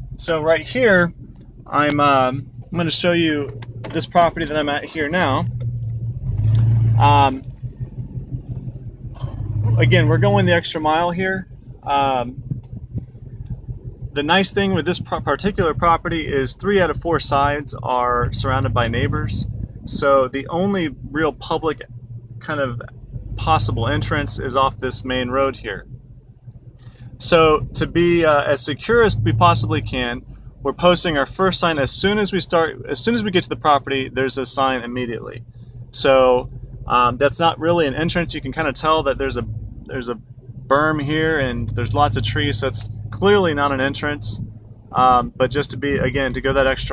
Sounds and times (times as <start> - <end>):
Outside, rural or natural: 0.0 - 46.9
Vehicle: 0.0 - 46.9
Speech: 0.2 - 1.1, 1.7 - 5.5, 7.0 - 7.4, 9.7 - 12.4, 14.2 - 25.8, 27.2 - 35.4, 36.0 - 46.9.